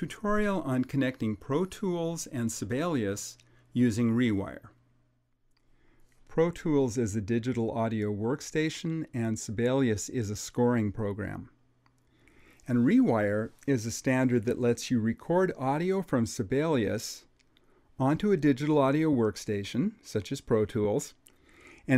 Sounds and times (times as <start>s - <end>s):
Speech: 0.0s - 4.8s, 6.3s - 11.6s, 12.6s - 17.3s, 18.0s - 21.2s.